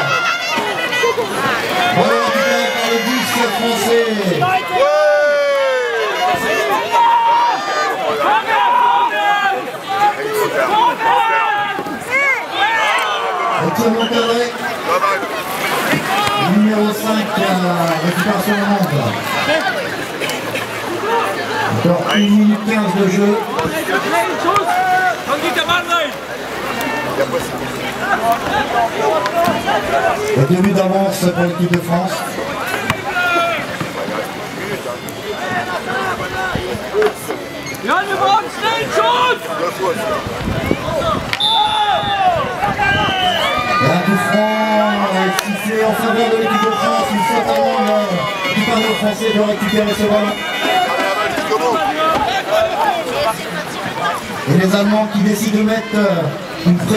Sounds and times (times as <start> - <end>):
Rowboat, canoe, kayak: 0.0 - 56.9.